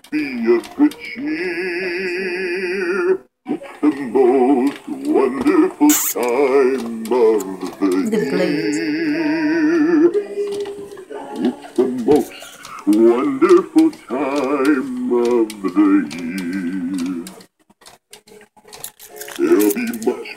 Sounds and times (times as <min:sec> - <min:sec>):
Male singing: 0:00.0 - 0:17.4, 0:19.4 - 0:20.3
Music: 0:03.1 - 0:20.3.